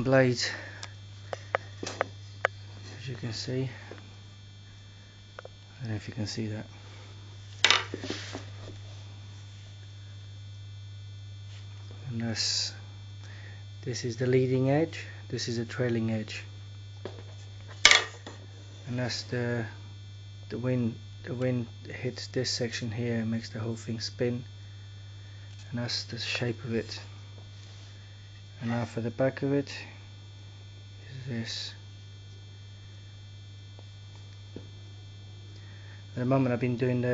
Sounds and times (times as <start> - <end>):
Speech: 0.0 - 0.8, 2.8 - 3.9, 5.7 - 6.7, 12.0 - 12.9, 13.8 - 16.5, 18.9 - 19.8, 20.5 - 24.5, 25.7 - 27.2, 28.6 - 30.0, 31.0 - 31.8, 36.2 - 37.1.